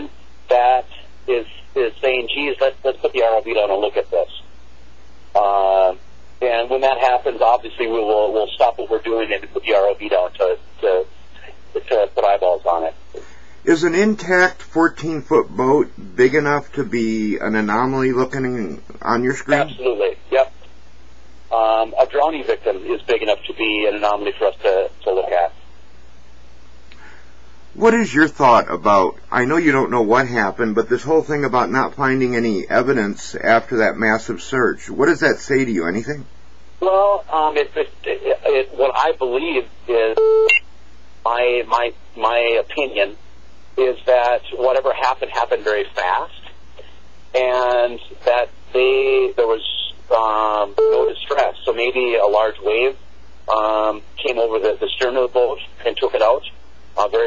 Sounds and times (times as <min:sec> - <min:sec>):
Speech: 0:00.0 - 0:04.5, 0:05.4 - 0:20.7, 0:21.5 - 0:25.6, 0:27.8 - 0:40.2, 0:41.3 - 0:43.2, 0:43.8 - 0:46.6, 0:47.3 - 0:57.2.